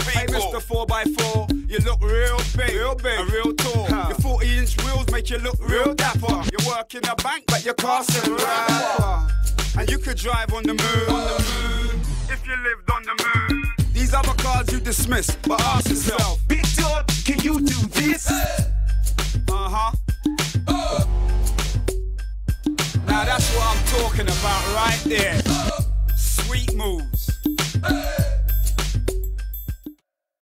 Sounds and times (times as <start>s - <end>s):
Music: 0.0s - 30.0s
Speech: 0.1s - 0.7s, 19.5s - 20.0s, 26.2s - 27.1s.